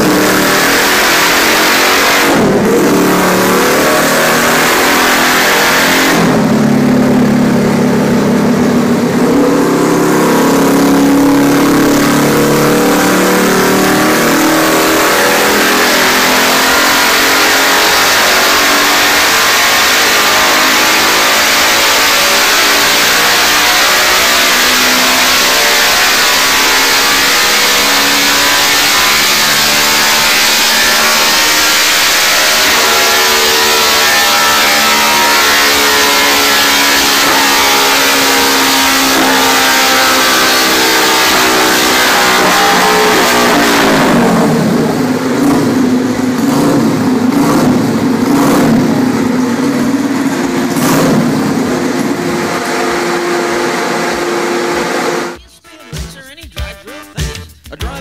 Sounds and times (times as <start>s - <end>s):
Motorcycle: 0.0s - 55.4s
Music: 55.4s - 58.0s.